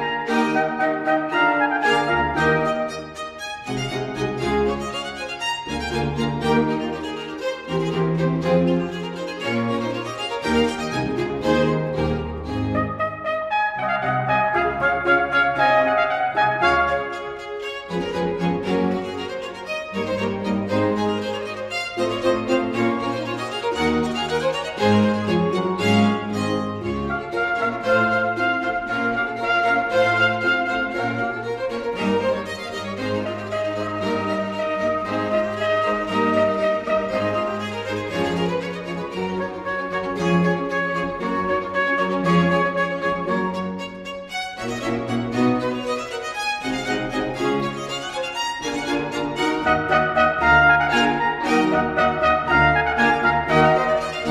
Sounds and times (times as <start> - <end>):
Piano: 0.0 - 54.3.